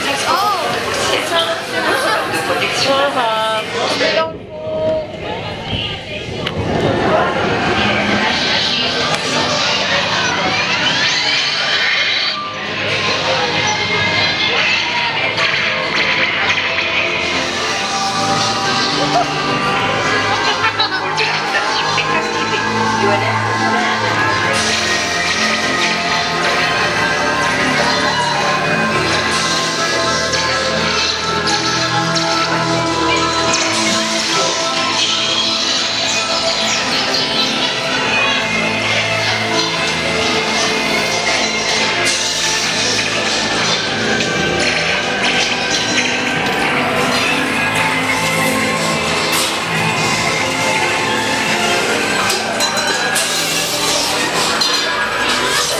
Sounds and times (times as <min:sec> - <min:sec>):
Speech: 0:00.0 - 0:16.8, 0:18.9 - 0:25.6
Music: 0:00.0 - 0:55.7.